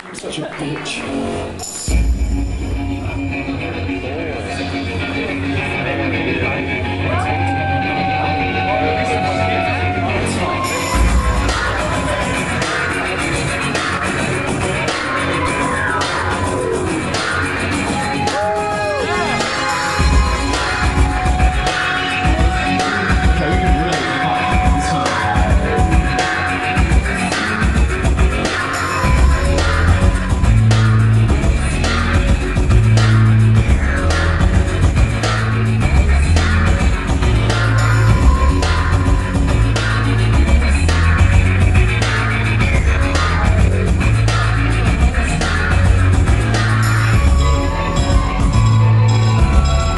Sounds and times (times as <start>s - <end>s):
Independent music: 0.0s - 49.9s
Rock music: 1.0s - 49.9s.